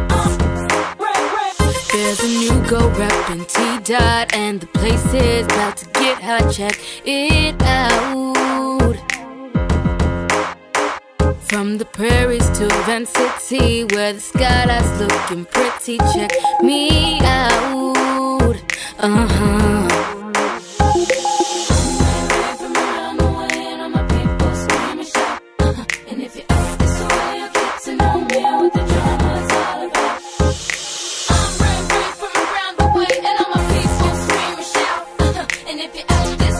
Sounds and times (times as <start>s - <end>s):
Soundtrack music: 16.0s - 18.3s, 19.8s - 25.4s, 26.5s - 36.5s.